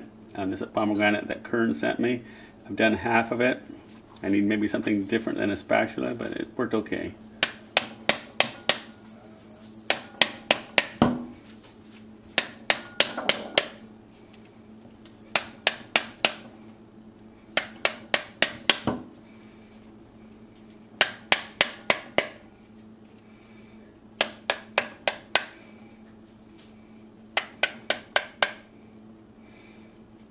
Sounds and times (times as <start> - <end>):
Speech: 0.4 - 3.6, 4.2 - 7.2.